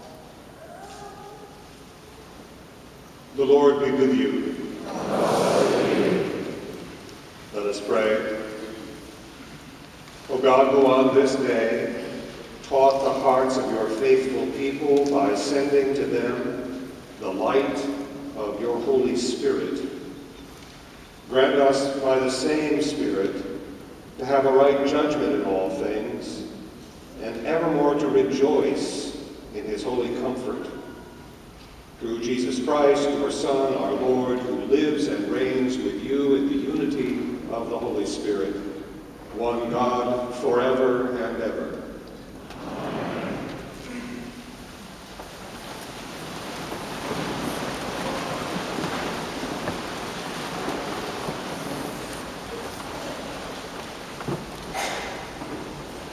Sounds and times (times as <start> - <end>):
Crowd: 4.3 - 6.9, 42.4 - 44.4.